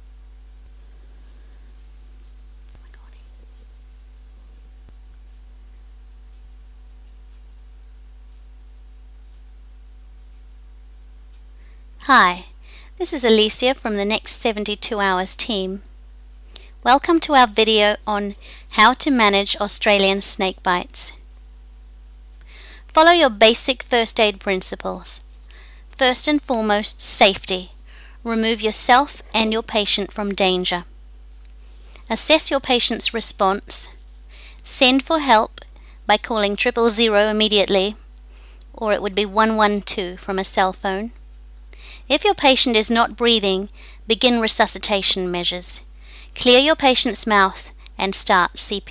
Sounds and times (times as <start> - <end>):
Inside, small room: 0.0 - 48.9
Speech: 12.0 - 15.8, 16.8 - 21.2, 22.9 - 25.2, 26.0 - 27.7, 28.3 - 30.9, 32.1 - 34.0, 34.6 - 38.0, 38.8 - 41.2, 42.1 - 45.8, 46.4 - 48.9.